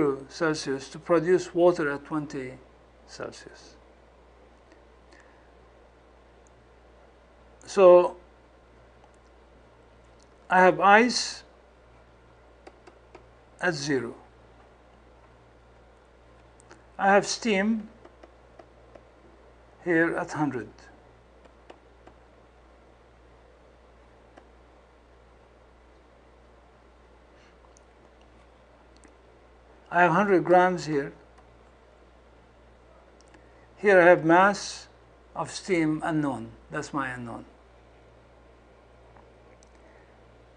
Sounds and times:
Speech: 0.0s - 3.8s, 7.7s - 8.2s, 10.5s - 11.5s, 13.6s - 14.3s, 17.0s - 18.0s, 19.8s - 20.9s, 29.9s - 31.2s, 33.8s - 37.6s.

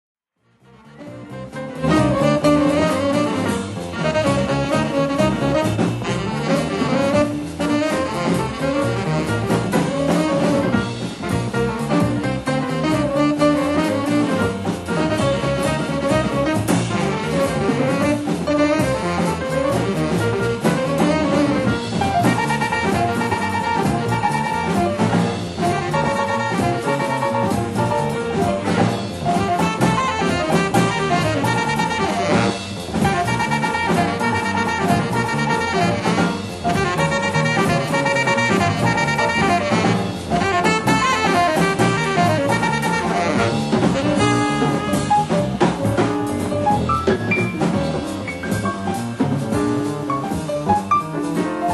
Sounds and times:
Music: 0.3s - 51.7s.

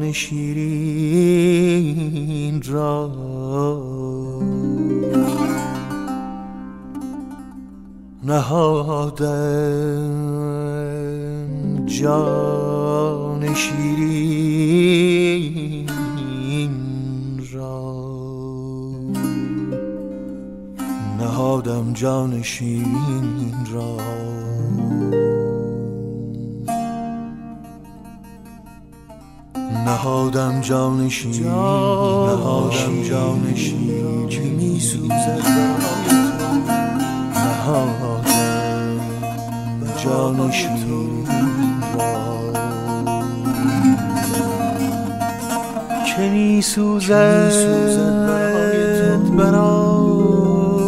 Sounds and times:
Music: 0.0s - 50.8s.

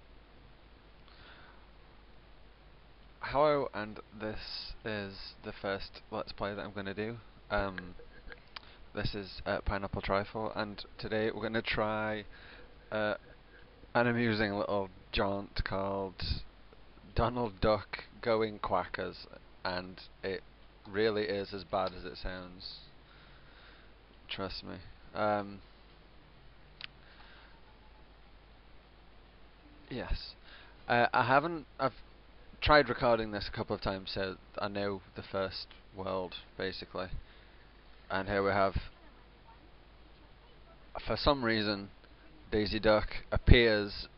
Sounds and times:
Speech: 3.2s - 8.0s, 9.0s - 12.3s, 12.9s - 13.2s, 14.0s - 16.5s, 17.1s - 22.9s, 24.3s - 25.6s, 29.9s - 32.0s, 32.6s - 37.2s, 38.1s - 44.1s.

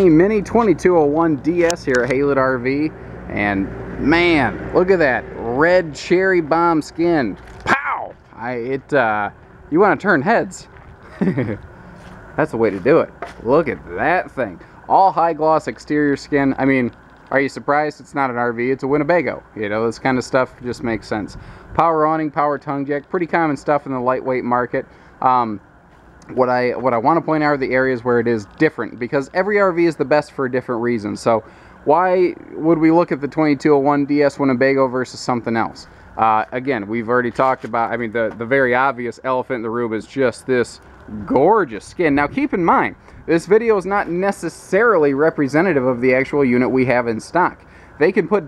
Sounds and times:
Speech: 0.0s - 10.7s, 12.4s - 25.6s, 26.2s - 48.4s.

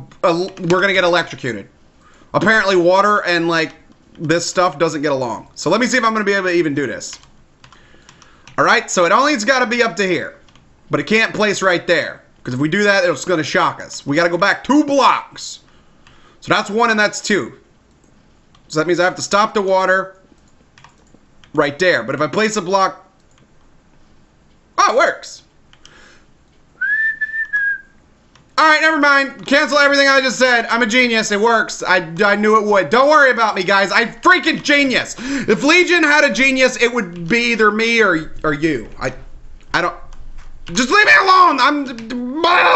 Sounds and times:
Speech: 0.0s - 1.7s, 2.4s - 7.2s, 8.6s - 15.7s, 16.4s - 17.6s, 18.7s - 20.2s, 21.5s - 23.1s, 24.8s - 25.5s, 28.6s - 40.1s, 40.7s - 42.7s
Whistling: 26.8s - 28.0s.

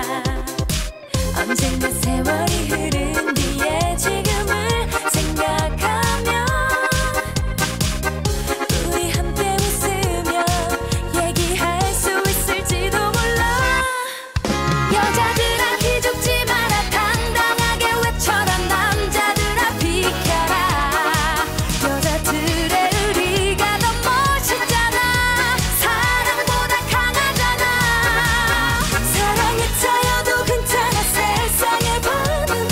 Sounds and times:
Music of Asia: 0.0s - 13.8s, 14.4s - 32.7s
Disco: 0.0s - 32.7s
Singing: 14.9s - 32.7s.

